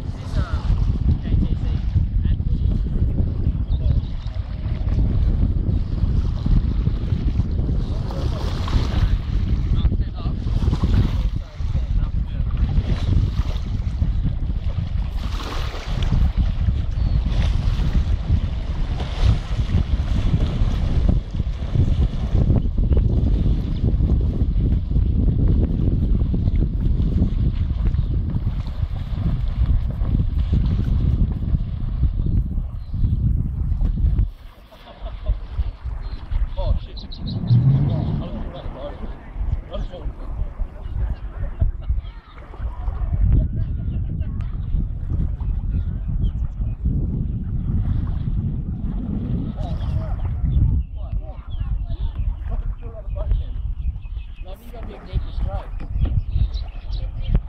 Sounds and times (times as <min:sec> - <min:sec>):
Rowboat, canoe, kayak: 0:00.0 - 0:57.4.